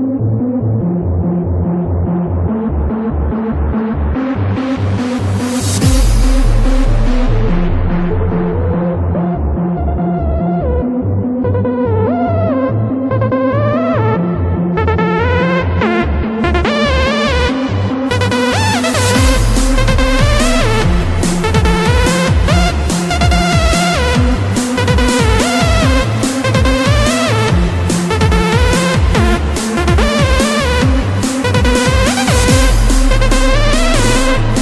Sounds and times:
Electronic dance music: 0:00.0 - 0:34.6
Electronica: 0:00.0 - 0:34.6
Techno: 0:00.0 - 0:34.6
Dubstep: 0:01.9 - 0:10.8, 0:14.8 - 0:34.6.

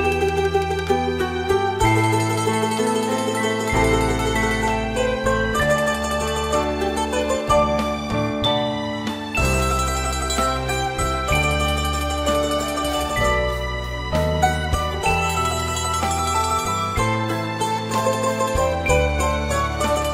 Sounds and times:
Mandolin: 0:00.0 - 0:20.1.

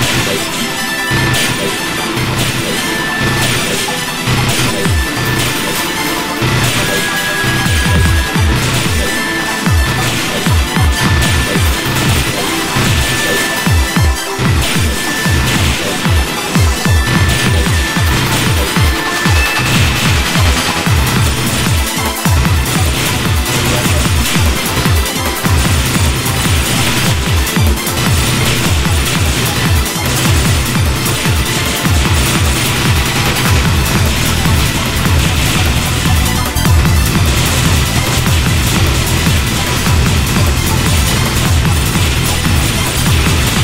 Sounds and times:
Dance music: 0:00.0 - 0:43.6
Theme music: 0:00.0 - 0:43.6.

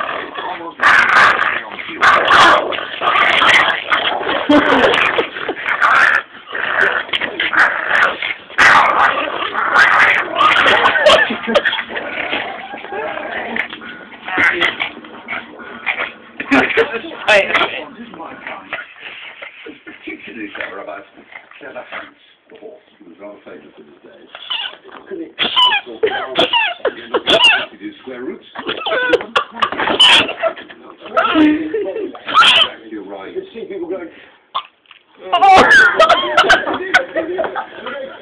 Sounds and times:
Yip: 0:24.4 - 0:24.8, 0:25.4 - 0:27.7, 0:29.8 - 0:30.4, 0:32.3 - 0:32.7
Speech: 0:35.2 - 0:38.2.

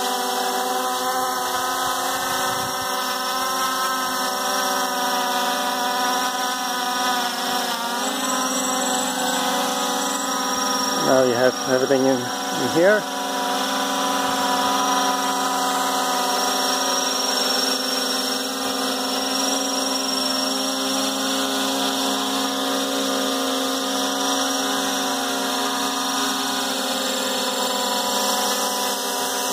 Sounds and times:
Speech: 0:11.0 - 0:13.1.

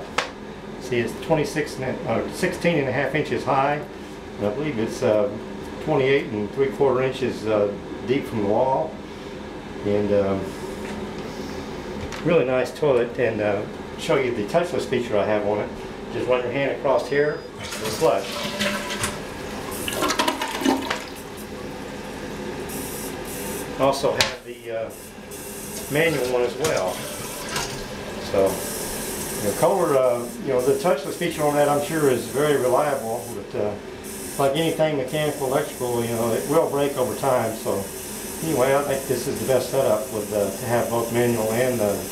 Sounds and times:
Toilet flush: 0:17.6 - 0:22.2, 0:25.7 - 0:28.1.

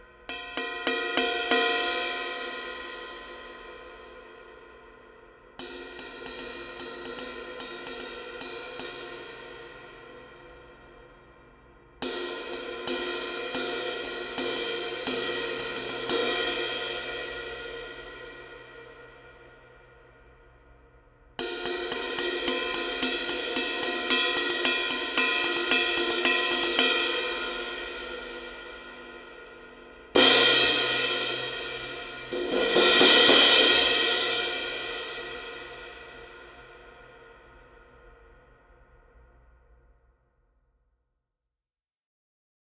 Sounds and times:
Music: 0:00.0 - 0:41.5.

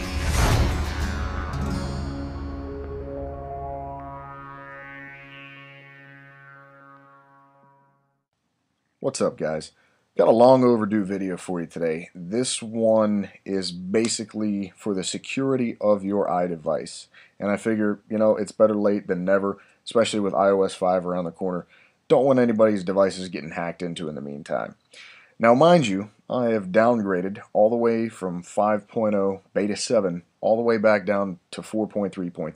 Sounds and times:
Music: 0:00.0 - 0:07.6
Speech: 0:09.0 - 0:24.8, 0:25.4 - 0:32.5.

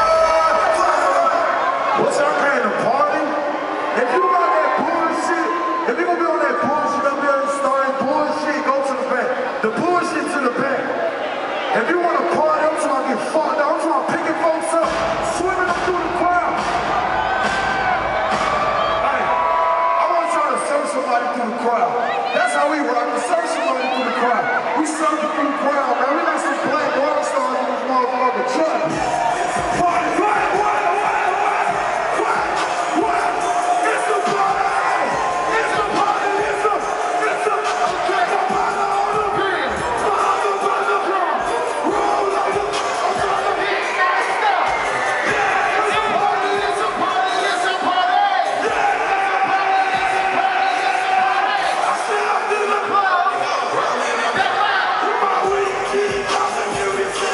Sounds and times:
Music: 0:00.0 - 0:02.9, 0:14.0 - 0:19.8, 0:28.8 - 0:57.3.

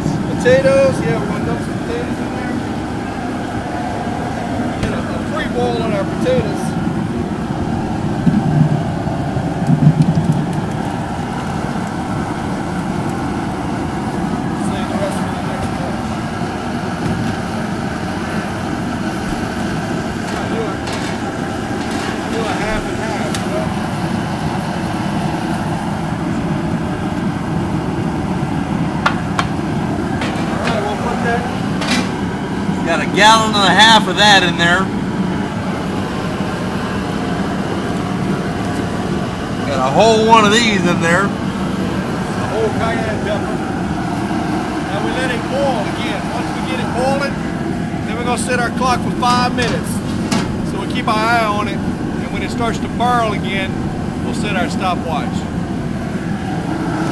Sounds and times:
Speech: 0:00.0 - 0:02.6, 0:04.7 - 0:06.8, 0:14.6 - 0:16.1, 0:20.3 - 0:20.9, 0:22.2 - 0:23.7, 0:30.5 - 0:31.5, 0:32.8 - 0:34.9, 0:39.6 - 0:41.4, 0:42.4 - 0:43.6, 0:44.9 - 0:47.4, 0:48.1 - 0:50.0, 0:50.6 - 0:55.5.

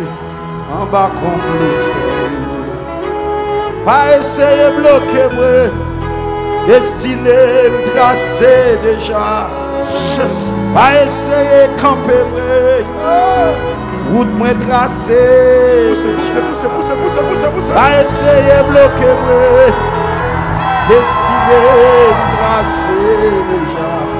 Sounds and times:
Music: 0:00.0 - 0:24.1.

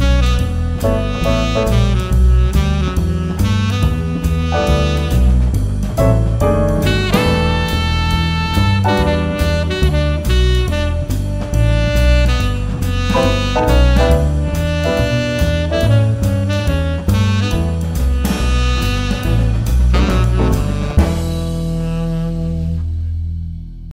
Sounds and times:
Music: 0:00.0 - 0:23.9.

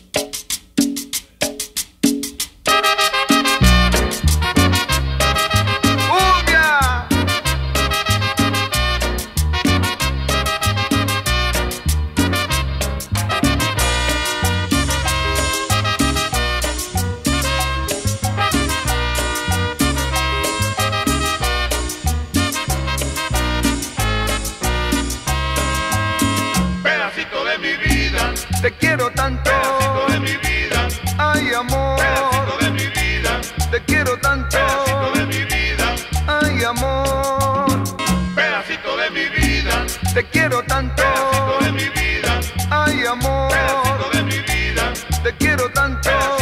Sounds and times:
Music: 0:00.0 - 0:46.4.

